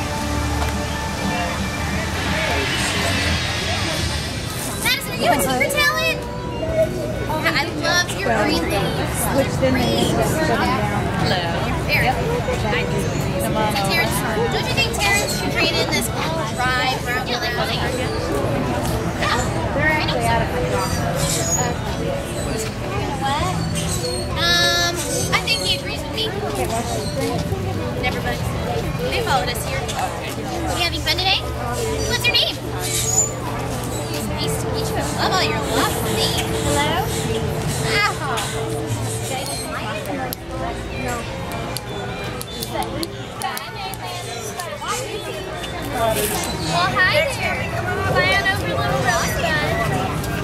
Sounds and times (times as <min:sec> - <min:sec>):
Music: 0:00.0 - 0:43.3
Speech: 0:01.2 - 0:50.4.